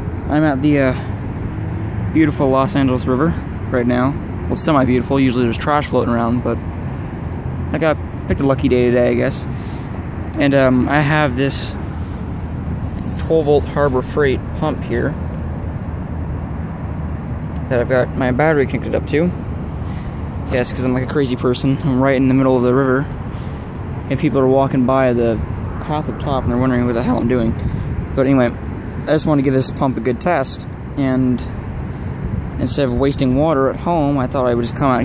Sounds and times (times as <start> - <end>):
Speech: 0.3 - 1.1, 2.1 - 6.6, 7.7 - 9.5, 10.4 - 11.8, 13.1 - 15.2, 17.6 - 19.4, 20.5 - 23.1, 24.1 - 27.6, 28.2 - 31.6, 32.6 - 35.0.